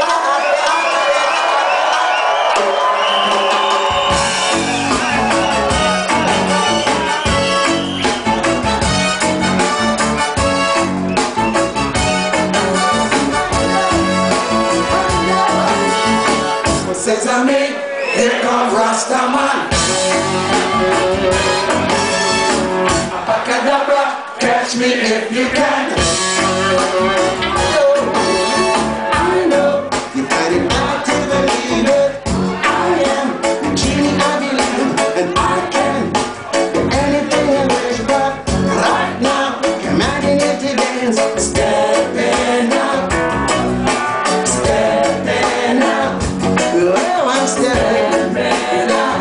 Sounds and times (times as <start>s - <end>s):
Drum: 3.3s - 16.9s, 29.2s - 49.2s.